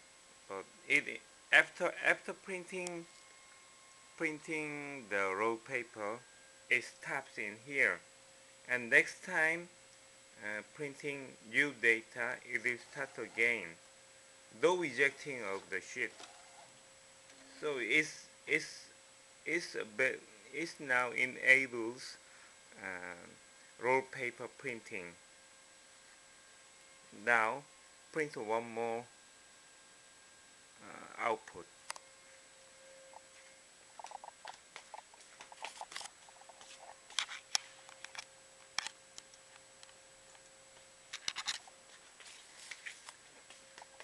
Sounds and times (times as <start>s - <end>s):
Speech: 0.5s - 3.1s, 4.2s - 8.1s, 8.7s - 9.8s, 10.4s - 13.8s, 14.6s - 16.3s, 17.4s - 22.2s, 22.8s - 25.2s, 27.1s - 29.1s, 30.8s - 31.7s
Printer: 12.7s - 13.7s, 15.0s - 16.8s.